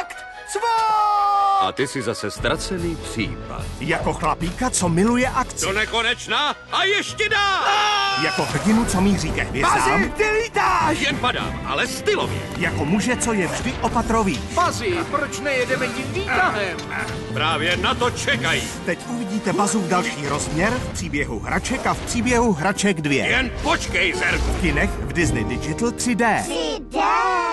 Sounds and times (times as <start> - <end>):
Music: 0.0 - 27.5.